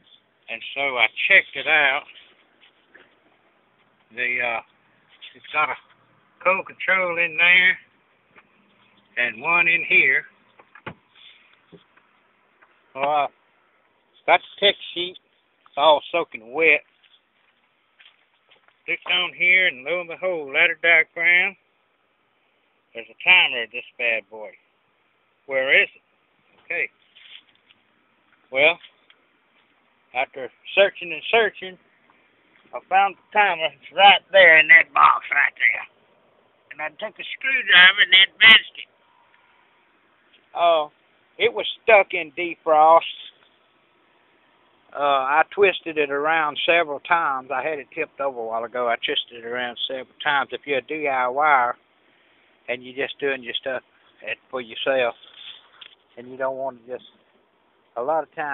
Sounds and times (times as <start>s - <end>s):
Speech: 0.5s - 2.3s, 4.1s - 7.9s, 9.2s - 10.3s, 13.0s - 13.3s, 14.2s - 16.8s, 18.9s - 21.6s, 22.9s - 24.6s, 25.5s - 26.0s, 26.6s - 26.9s, 28.5s - 28.8s, 30.1s - 31.8s, 32.7s - 35.9s, 36.7s - 38.9s, 40.5s - 43.4s, 44.9s - 51.8s, 52.7s - 55.6s, 56.2s - 57.1s, 58.0s - 58.5s.